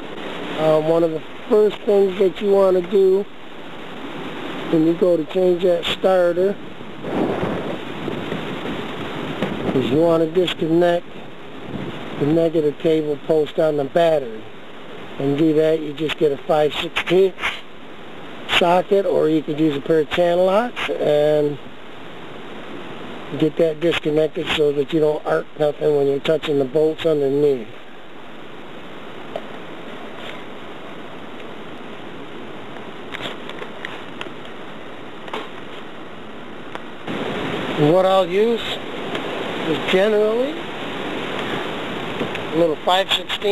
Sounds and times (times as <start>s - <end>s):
Speech: 0.6s - 3.3s, 4.7s - 6.6s, 9.7s - 11.0s, 12.2s - 14.5s, 15.2s - 17.7s, 18.5s - 21.6s, 23.3s - 27.7s, 37.8s - 38.8s, 39.6s - 40.6s, 42.5s - 43.5s.